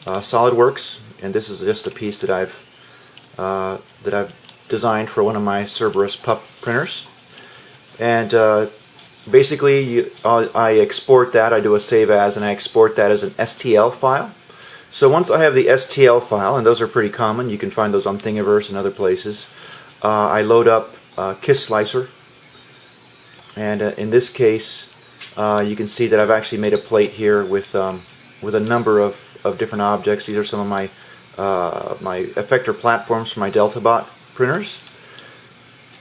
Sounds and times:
Speech: 0:00.0 - 0:02.6, 0:03.4 - 0:07.1, 0:08.0 - 0:22.2, 0:23.5 - 0:34.9.

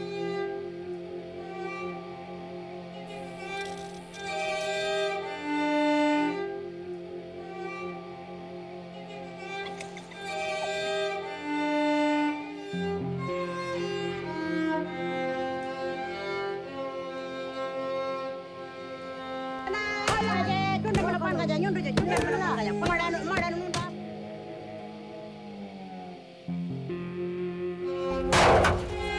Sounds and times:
Violin, fiddle: 0:00.0 - 0:25.5, 0:26.2 - 0:29.1
Speech: 0:19.7 - 0:24.0.

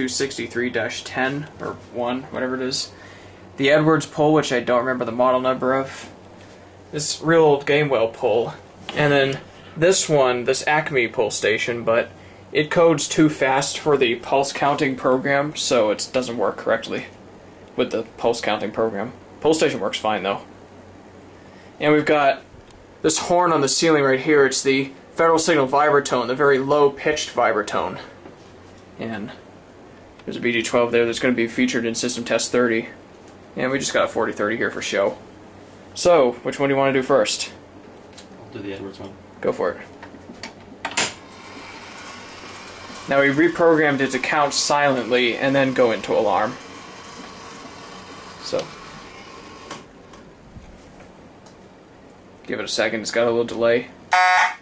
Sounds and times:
Speech: 0:00.0 - 0:03.0, 0:03.6 - 0:06.2, 0:06.9 - 0:17.2, 0:17.8 - 0:20.5, 0:21.8 - 0:28.2, 0:29.0 - 0:29.5, 0:30.2 - 0:33.0, 0:33.6 - 0:35.2, 0:36.0 - 0:37.6, 0:38.4 - 0:40.0, 0:43.1 - 0:46.6, 0:48.4 - 0:48.8, 0:52.4 - 0:54.0.

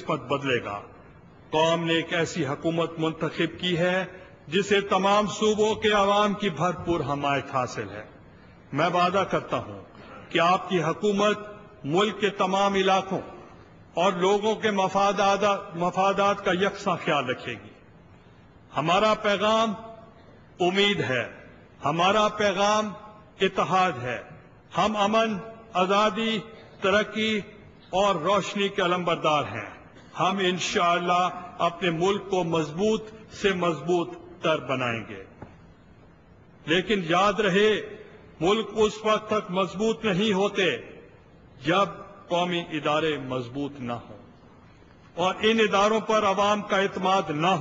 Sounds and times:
Male speech, man speaking: 0:00.0 - 0:00.9, 0:01.5 - 0:08.1, 0:08.7 - 0:13.4, 0:14.0 - 0:17.7, 0:18.7 - 0:20.0, 0:20.6 - 0:35.3, 0:36.7 - 0:40.9, 0:41.6 - 0:44.2, 0:45.2 - 0:47.6
Narration, monologue: 0:00.0 - 0:47.6.

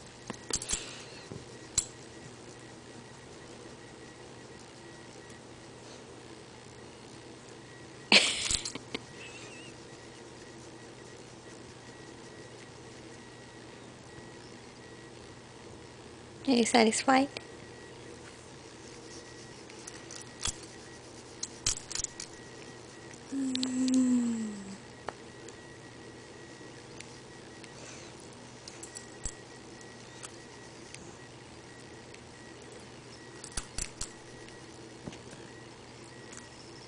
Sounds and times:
Speech: 0:16.4 - 0:17.4.

